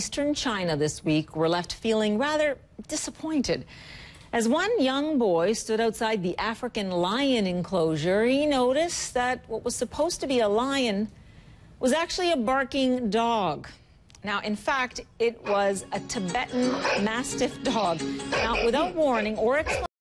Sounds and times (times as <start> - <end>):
Speech: 11.8 - 19.9
Music: 15.4 - 19.9
Bow-wow: 18.3 - 19.9.